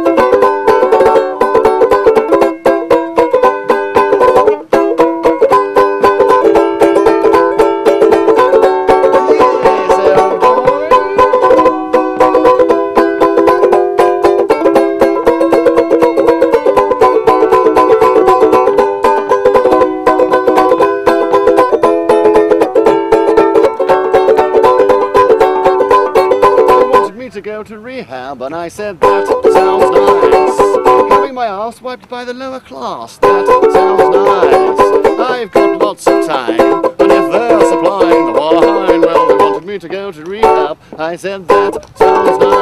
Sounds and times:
Banjo: 0.0s - 27.7s, 28.4s - 31.8s, 33.1s - 42.6s.

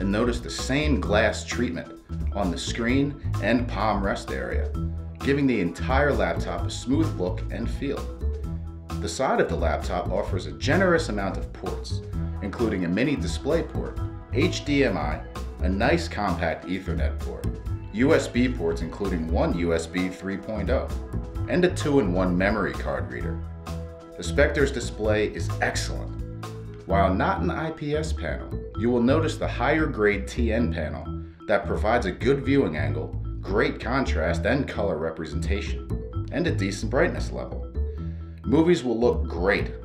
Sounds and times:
Speech: 0.0s - 8.1s, 9.0s - 23.4s, 24.2s - 26.1s, 26.9s - 37.6s, 38.5s - 39.8s
Music: 0.0s - 39.8s.

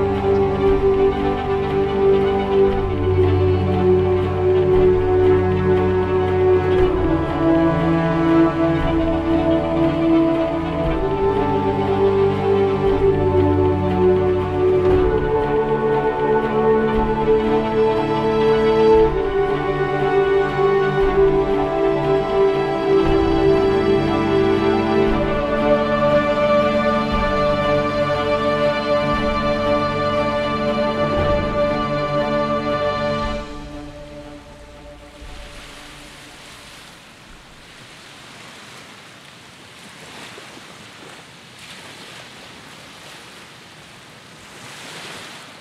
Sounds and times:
Outside, rural or natural: 0.0s - 45.6s.

